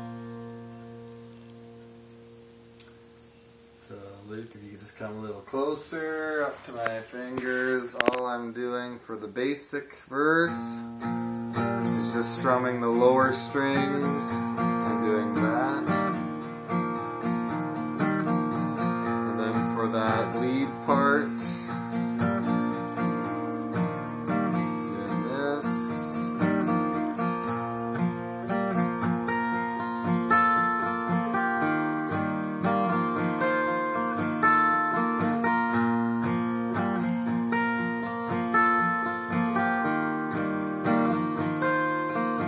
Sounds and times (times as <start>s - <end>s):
Acoustic guitar: 0.0s - 42.4s
Strum: 0.0s - 42.4s.